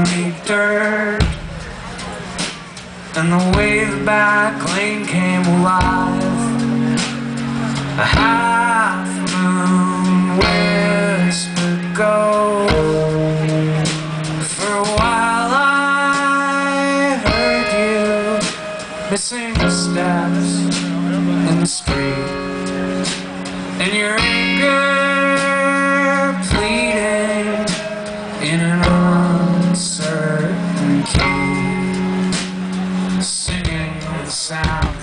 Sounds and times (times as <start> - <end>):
Music: 0.0 - 35.0.